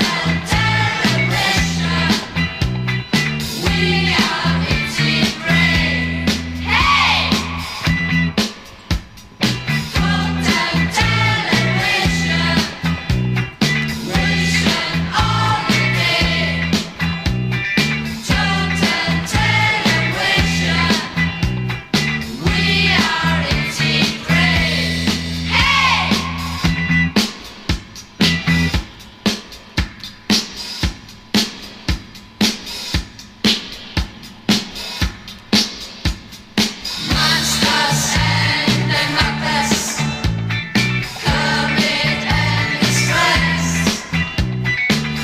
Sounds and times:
Psychedelic rock: 0:00.0 - 0:45.2.

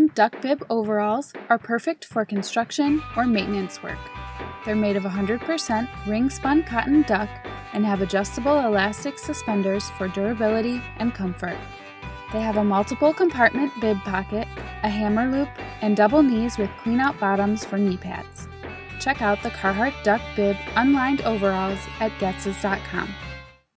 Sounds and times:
Speech: 0:00.0 - 0:11.6, 0:12.3 - 0:18.4, 0:19.0 - 0:23.2
Music: 0:00.0 - 0:23.7.

